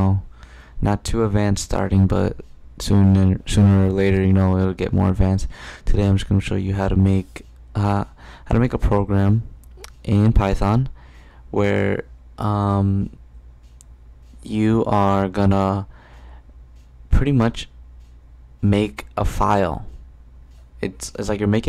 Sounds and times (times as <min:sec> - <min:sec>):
Speech: 0:00.0 - 0:13.2, 0:14.4 - 0:15.9, 0:17.1 - 0:17.8, 0:18.6 - 0:20.0, 0:20.8 - 0:21.6.